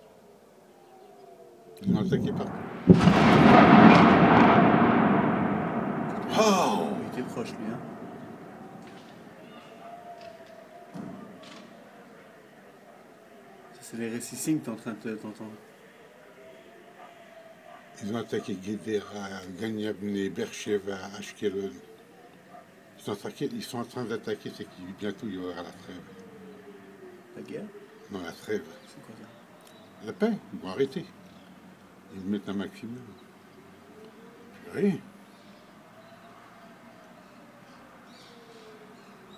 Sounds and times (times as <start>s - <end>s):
Speech: 1.8s - 2.6s, 6.2s - 7.8s, 13.7s - 15.6s, 18.0s - 21.8s, 23.0s - 26.1s, 27.4s - 29.4s, 30.0s - 31.1s, 32.1s - 33.2s, 34.6s - 35.1s.